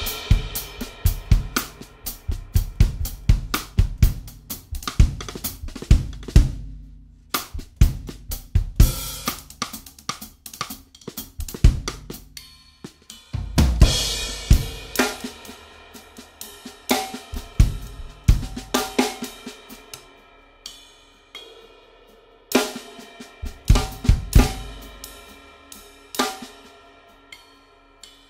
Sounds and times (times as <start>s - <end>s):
Drum kit: 0.0s - 28.2s.